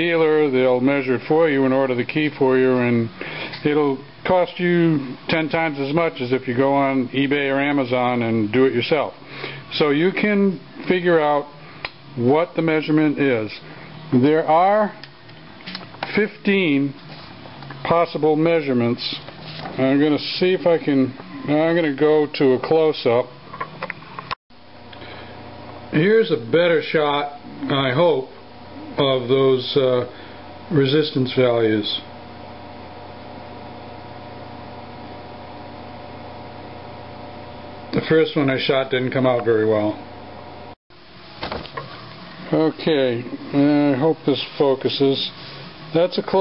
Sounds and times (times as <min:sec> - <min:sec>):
Speech: 0:00.0 - 0:11.6, 0:12.2 - 0:15.0, 0:16.1 - 0:17.0, 0:17.8 - 0:23.3, 0:25.9 - 0:30.1, 0:30.7 - 0:32.1, 0:37.9 - 0:40.0, 0:42.5 - 0:46.4.